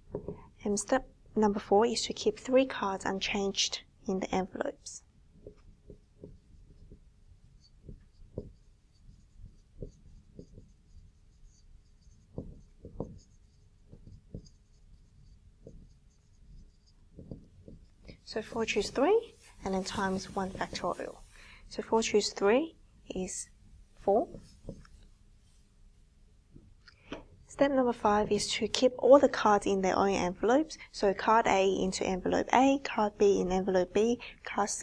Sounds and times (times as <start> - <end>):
Writing: 4.8 - 22.5, 23.1 - 26.1.